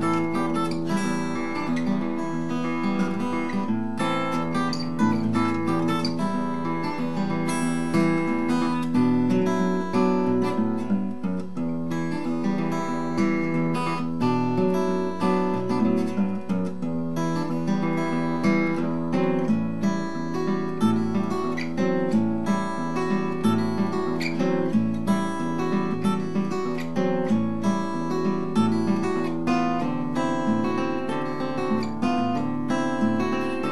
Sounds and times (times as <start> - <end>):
Music: 0.0 - 33.7.